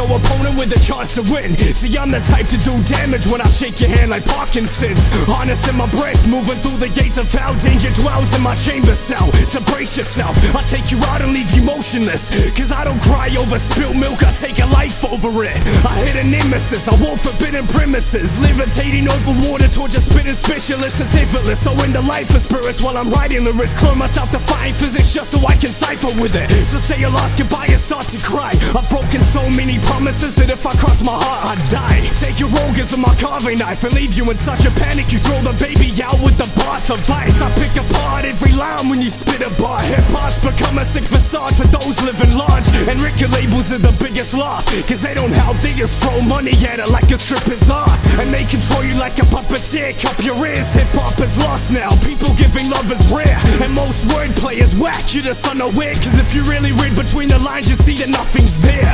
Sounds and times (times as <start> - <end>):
Music: 0.0 - 58.9.